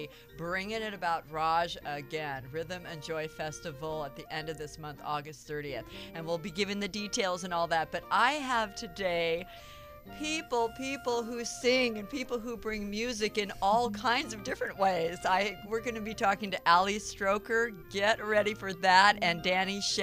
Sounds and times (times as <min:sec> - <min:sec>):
Speech: 0:00.0 - 0:09.4, 0:10.2 - 0:20.0
Music: 0:00.0 - 0:20.0.